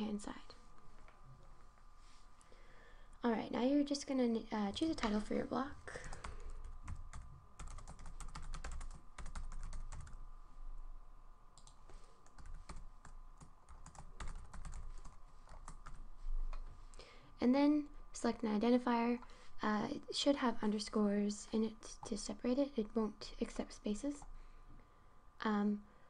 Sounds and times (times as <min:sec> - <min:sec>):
Speech: 0:00.0 - 0:00.6, 0:03.2 - 0:06.0, 0:17.4 - 0:24.2, 0:25.4 - 0:25.9.